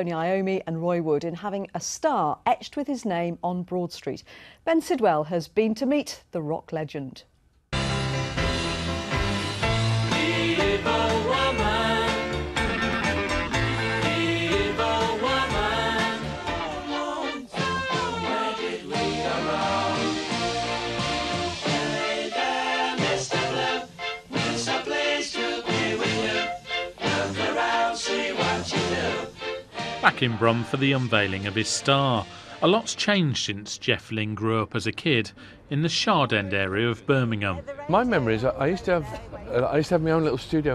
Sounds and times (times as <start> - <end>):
Speech: 0.0 - 7.3, 30.1 - 40.7
Music: 7.7 - 33.2.